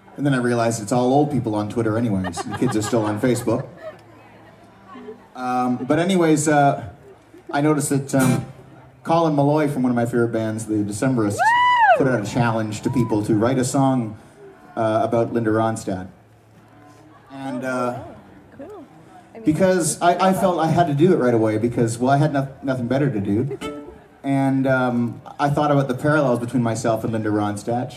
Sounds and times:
Music: 0:00.0 - 0:27.9.

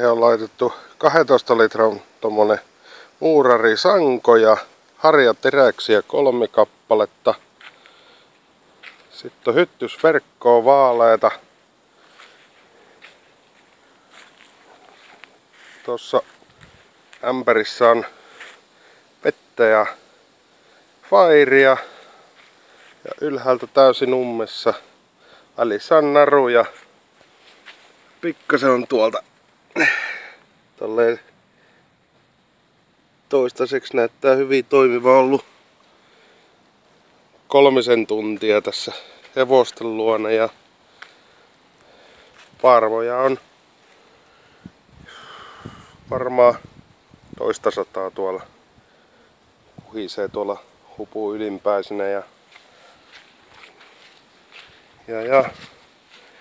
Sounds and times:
Speech: 0:00.0 - 0:07.4, 0:09.1 - 0:11.5, 0:15.8 - 0:16.3, 0:17.2 - 0:18.2, 0:19.2 - 0:20.0, 0:21.0 - 0:22.0, 0:23.0 - 0:24.9, 0:25.6 - 0:26.8, 0:28.2 - 0:29.3, 0:30.8 - 0:31.3, 0:33.3 - 0:35.5, 0:37.5 - 0:40.6, 0:42.6 - 0:43.5, 0:46.1 - 0:46.7, 0:47.4 - 0:48.6, 0:49.8 - 0:52.3, 0:55.0 - 0:55.8.

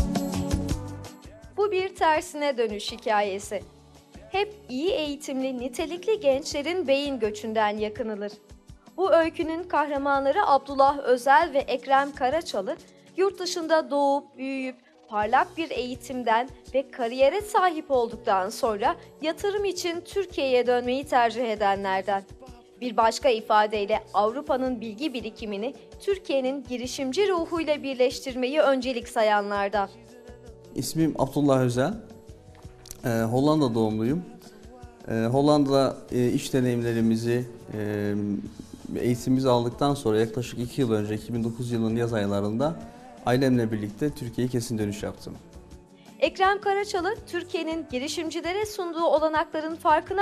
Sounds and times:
Music: 0:00.0 - 0:50.2
Speech: 0:01.6 - 0:03.6, 0:04.3 - 0:08.4, 0:09.0 - 0:22.2, 0:22.8 - 0:29.9, 0:30.8 - 0:32.0, 0:33.0 - 0:34.3, 0:35.1 - 0:45.4, 0:46.2 - 0:50.2.

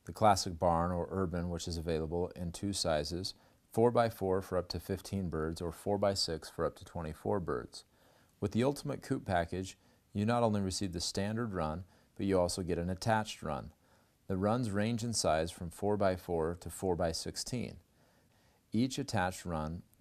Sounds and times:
Speech: 0:00.0 - 0:17.9, 0:18.7 - 0:20.0.

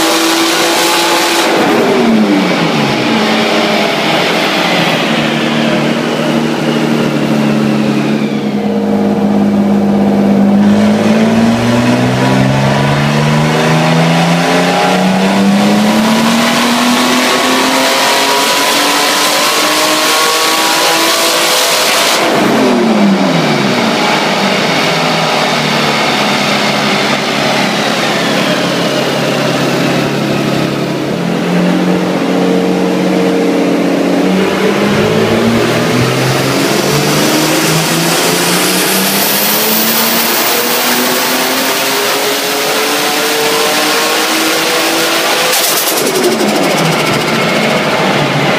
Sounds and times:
Car: 0:00.0 - 0:48.5.

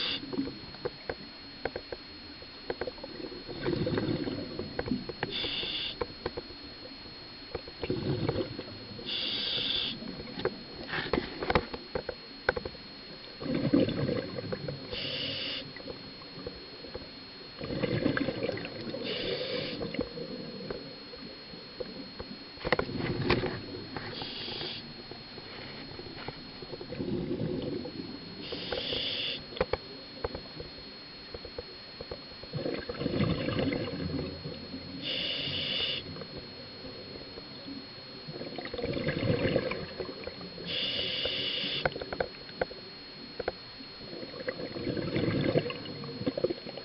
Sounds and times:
Hiss: 0:05.4 - 0:06.0, 0:09.1 - 0:10.0, 0:15.0 - 0:15.6, 0:19.1 - 0:19.8, 0:28.4 - 0:29.4, 0:35.0 - 0:36.0, 0:40.7 - 0:41.9.

